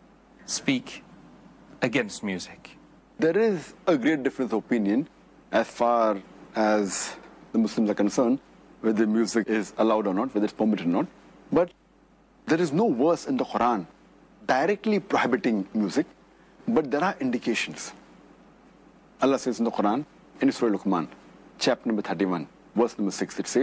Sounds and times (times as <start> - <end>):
Speech: 0.5 - 1.1, 1.8 - 11.8, 12.5 - 13.9, 14.5 - 18.0, 19.2 - 23.6.